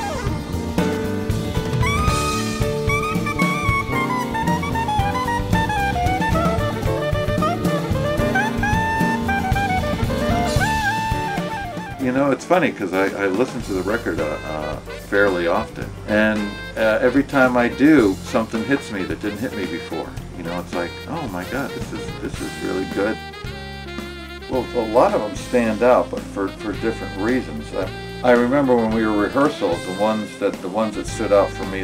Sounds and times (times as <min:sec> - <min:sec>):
Music: 0:00.0 - 0:31.8
Speech: 0:12.0 - 0:23.2, 0:24.5 - 0:31.8.